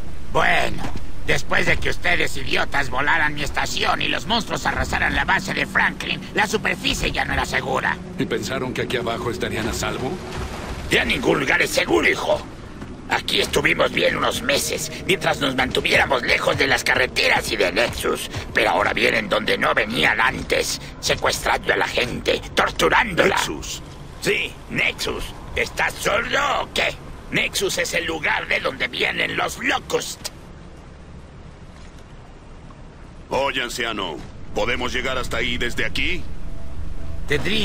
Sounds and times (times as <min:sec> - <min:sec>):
Speech: 0:00.3 - 0:10.2, 0:10.9 - 0:12.5, 0:13.1 - 0:30.3, 0:33.3 - 0:36.3, 0:37.3 - 0:37.6.